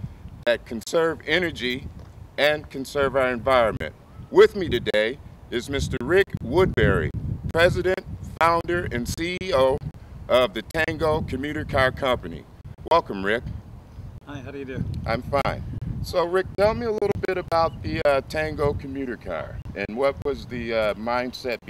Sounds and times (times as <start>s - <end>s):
Speech: 0.5s - 1.8s, 2.4s - 13.4s, 14.3s - 21.7s.